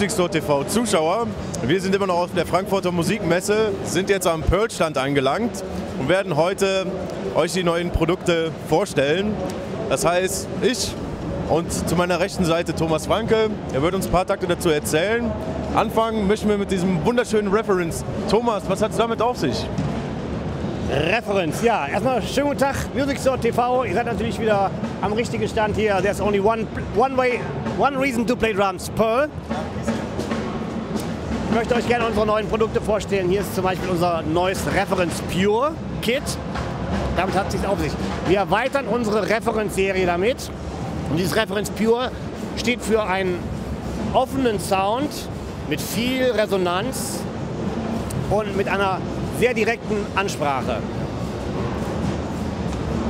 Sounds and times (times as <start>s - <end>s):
Speech: 0.0s - 19.7s, 20.8s - 30.0s, 31.5s - 36.4s, 37.2s - 40.5s, 41.1s - 43.5s, 44.1s - 47.3s, 48.2s - 50.8s
Drum: 7.4s - 53.1s
Drum kit: 19.7s - 53.1s.